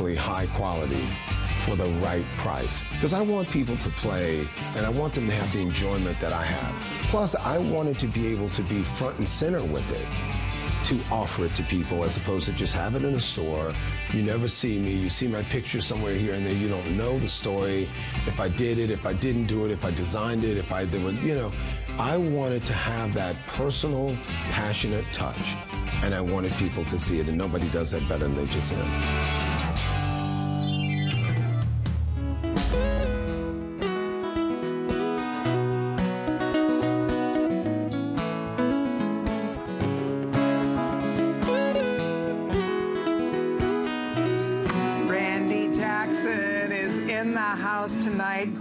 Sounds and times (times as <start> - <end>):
Speech: 0.0 - 10.1, 10.8 - 28.9, 45.1 - 48.6
Electric guitar: 0.0 - 48.6.